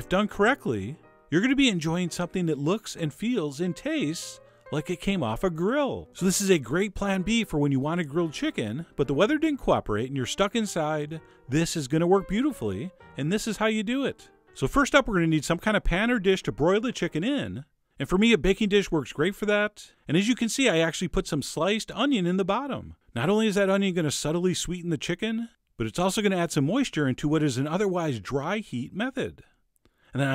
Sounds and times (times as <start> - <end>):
Speech: 0.0 - 29.5.